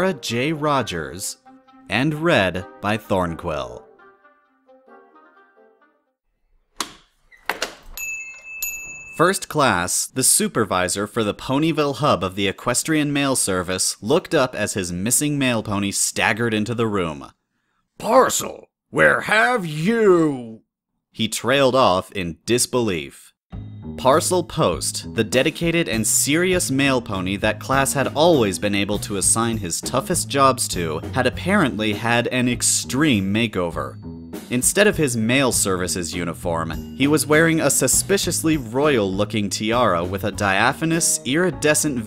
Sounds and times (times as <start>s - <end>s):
Speech: 0.0s - 3.8s, 9.2s - 17.4s, 18.0s - 20.6s, 21.2s - 23.4s, 24.0s - 42.0s
Music: 0.0s - 6.2s, 23.5s - 42.0s.